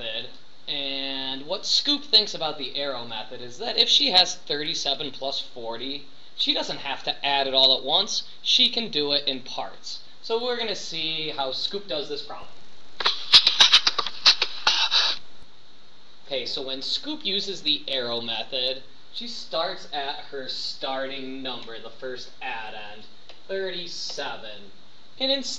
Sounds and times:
Speech: 0.0 - 14.8, 16.3 - 25.5.

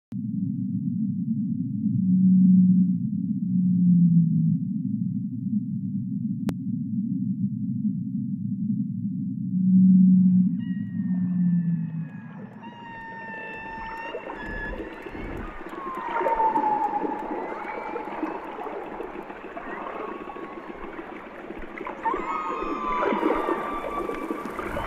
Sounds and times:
Whale vocalization: 9.5 - 24.8.

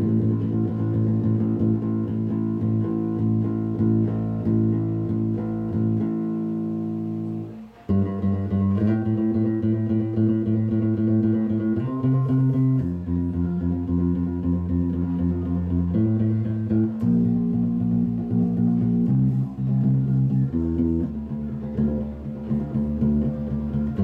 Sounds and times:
Bass guitar: 0.0 - 24.0.

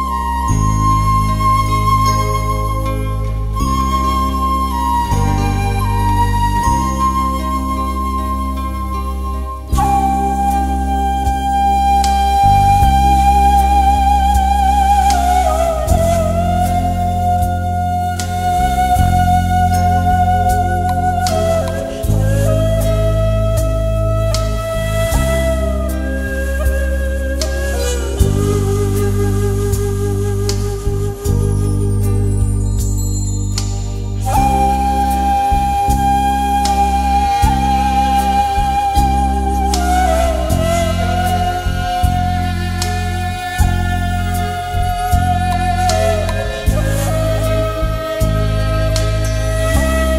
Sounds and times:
Background music: 0.0 - 50.1.

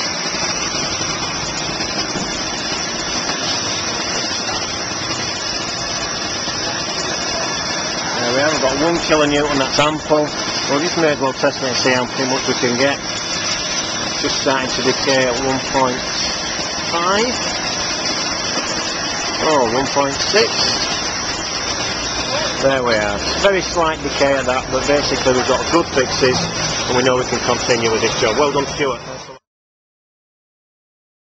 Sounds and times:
Speech: 7.3 - 13.0, 14.2 - 16.1, 16.9 - 17.4, 19.4 - 20.8, 22.3 - 29.4.

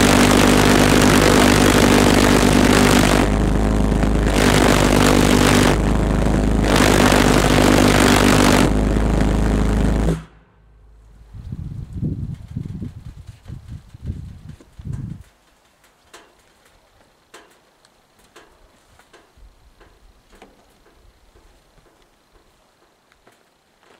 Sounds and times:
Engine: 0.0 - 16.8.

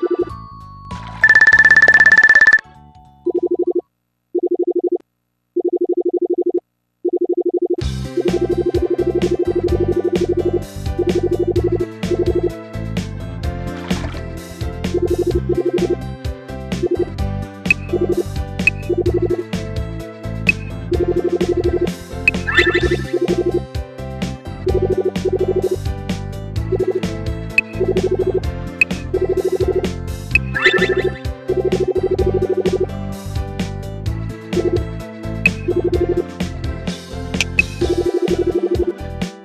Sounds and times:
Music: 0.0 - 3.7, 7.8 - 39.4.

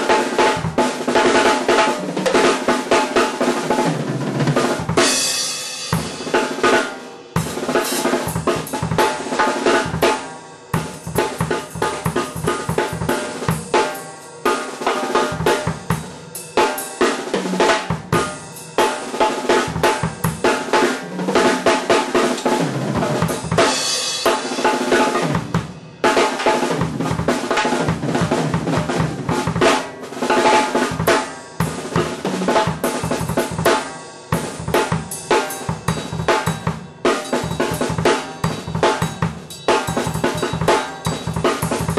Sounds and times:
Drum kit: 0.0 - 41.9
Inside, small room: 0.0 - 41.9.

